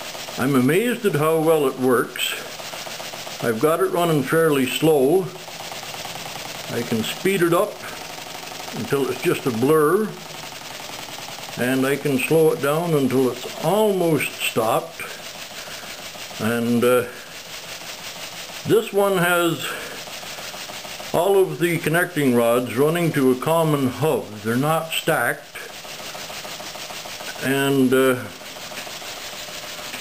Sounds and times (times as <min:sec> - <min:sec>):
Speech: 0:00.4 - 0:02.5, 0:03.4 - 0:05.4, 0:06.7 - 0:08.0, 0:08.7 - 0:10.2, 0:11.6 - 0:15.2, 0:16.4 - 0:17.2, 0:18.6 - 0:19.9, 0:21.1 - 0:25.7, 0:27.3 - 0:28.4.